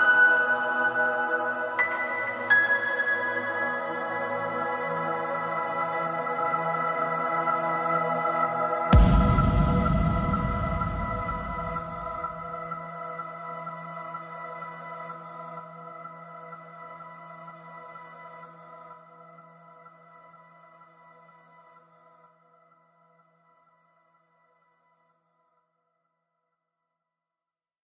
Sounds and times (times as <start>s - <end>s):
Music: 0.0s - 25.7s.